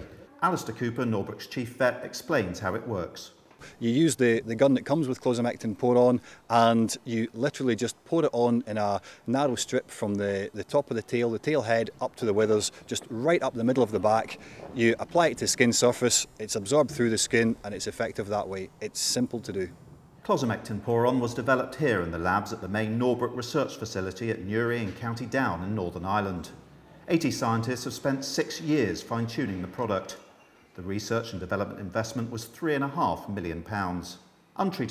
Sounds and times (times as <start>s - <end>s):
Speech: 0.0s - 34.9s.